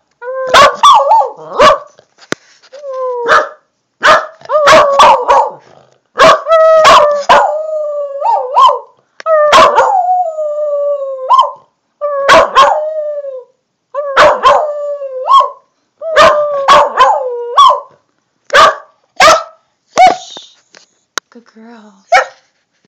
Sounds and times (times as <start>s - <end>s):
Canidae, dogs, wolves: 0.5s - 2.0s, 3.2s - 7.6s, 8.2s - 10.1s, 11.3s - 12.9s, 14.0s - 20.2s, 22.1s - 22.5s
Dog: 0.5s - 2.0s, 16.2s - 20.2s, 22.1s - 22.5s
Speech: 21.3s - 22.2s.